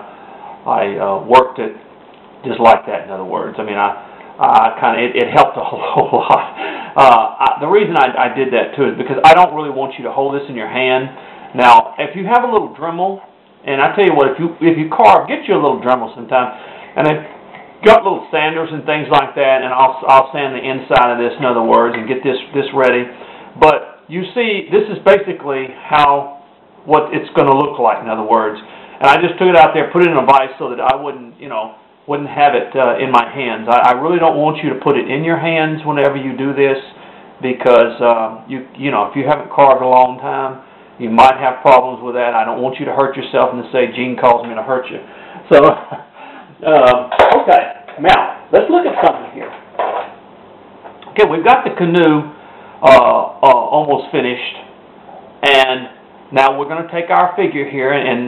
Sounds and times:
Speech: 0.6s - 49.6s, 51.0s - 54.7s, 55.4s - 58.2s.

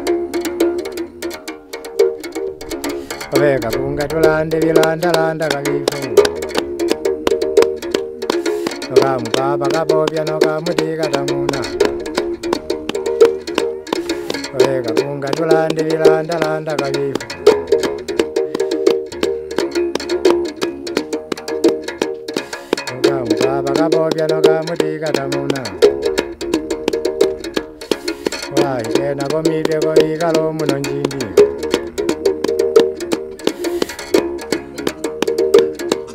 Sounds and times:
Music: 0.0s - 36.1s.

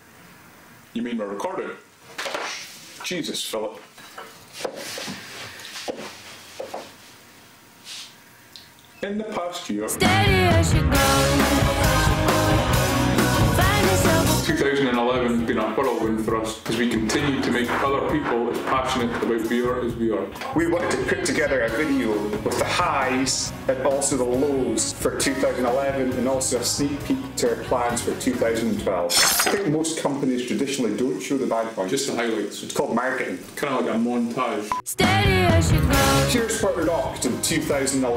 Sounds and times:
Narration, monologue: 0.9s - 4.6s, 8.3s - 10.0s, 14.5s - 34.9s, 36.2s - 38.1s
Male speech, man speaking: 1.0s - 1.9s, 3.0s - 3.9s, 9.0s - 10.0s, 14.4s - 34.7s, 36.3s - 38.1s.

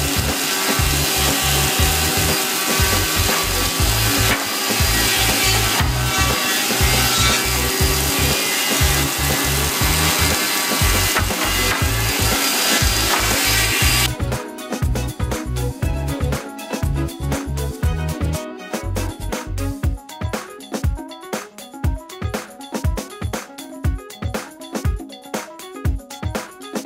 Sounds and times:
Wood: 0.0s - 14.1s
Sawing: 0.0s - 15.7s.

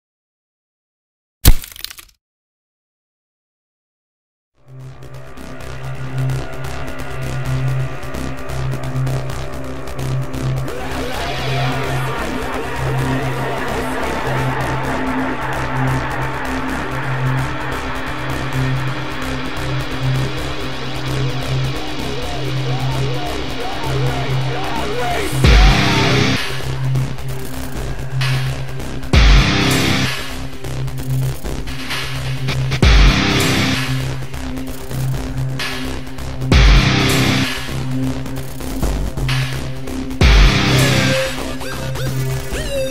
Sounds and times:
Crack: 1.4s - 2.2s
Music: 4.6s - 42.9s.

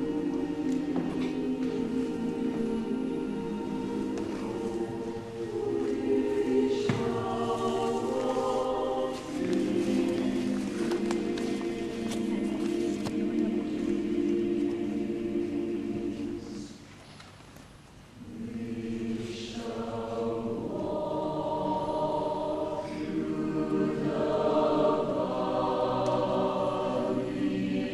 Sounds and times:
Music: 0.0s - 16.9s, 18.2s - 27.9s.

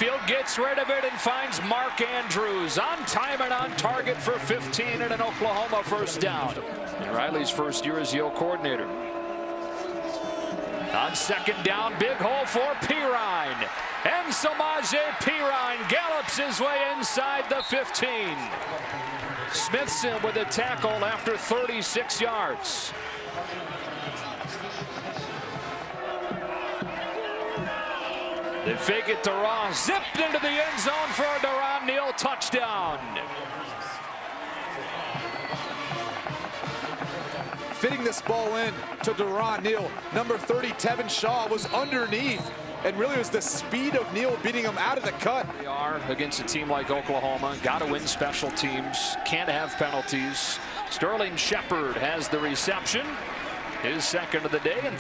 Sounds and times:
Speech: 0.0s - 9.0s, 10.9s - 18.5s, 19.5s - 25.2s, 28.7s - 34.0s, 37.8s - 53.2s, 53.8s - 55.0s.

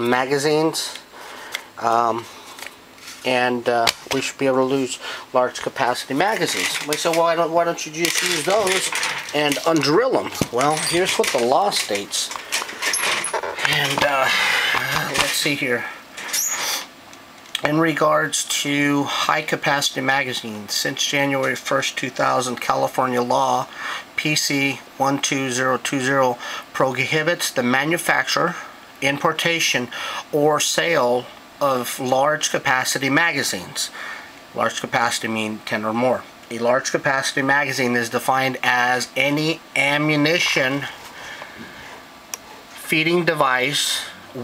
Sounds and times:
Speech: 0.0s - 1.0s, 1.8s - 2.3s, 3.2s - 12.4s, 13.6s - 16.0s, 17.6s - 41.0s, 42.8s - 44.4s
Inside, small room: 0.0s - 44.4s.

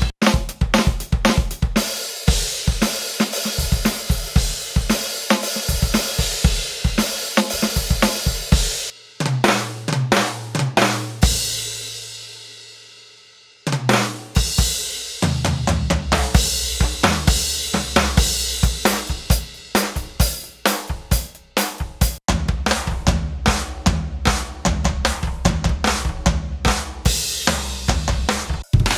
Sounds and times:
Drum: 0.0s - 12.5s, 13.7s - 28.9s
Drum kit: 0.0s - 28.9s.

